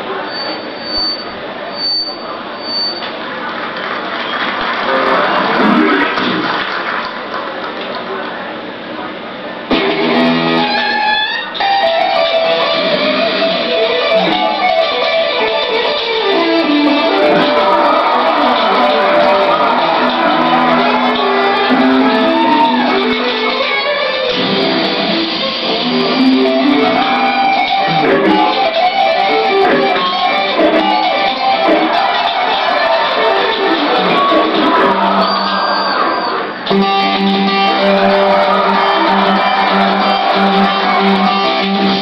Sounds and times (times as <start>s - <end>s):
Electric guitar: 4.9s - 6.6s, 9.7s - 42.0s.